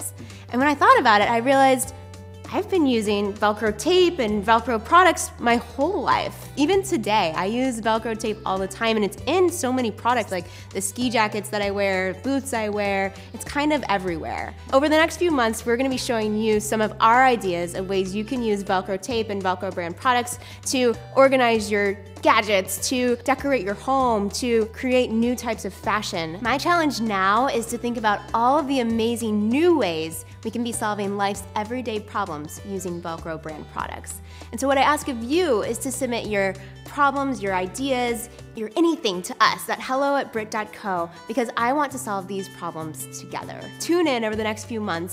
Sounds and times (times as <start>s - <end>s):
Speech: 0.0s - 1.9s, 2.5s - 45.1s
Music: 0.0s - 45.1s.